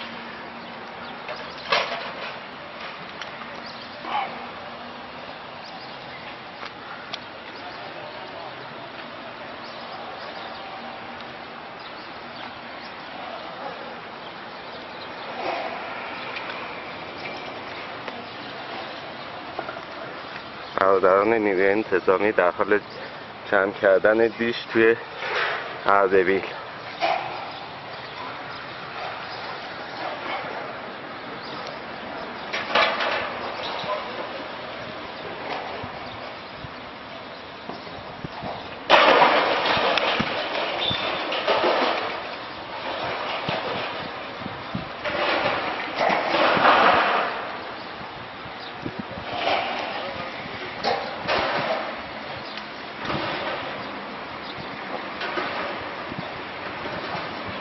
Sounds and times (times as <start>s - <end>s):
Speech: 20.8s - 22.8s, 23.5s - 25.1s, 25.8s - 26.6s.